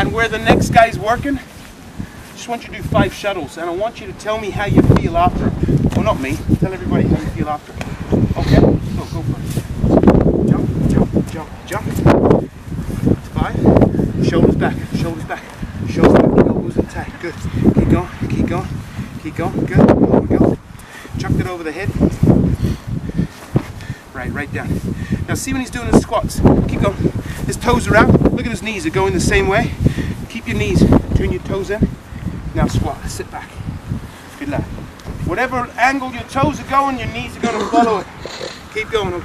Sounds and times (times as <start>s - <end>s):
Speech: 0.0s - 1.5s, 2.4s - 7.8s, 8.4s - 9.5s, 10.5s - 12.0s, 13.3s - 13.6s, 14.2s - 20.5s, 21.2s - 22.0s, 24.1s - 31.9s, 32.6s - 33.6s, 35.3s - 38.1s, 38.8s - 39.2s.